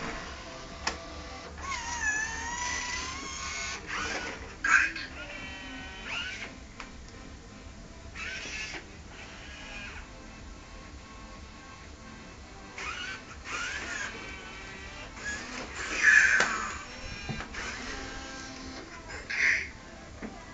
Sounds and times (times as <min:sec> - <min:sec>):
Music: 0:00.0 - 0:20.5.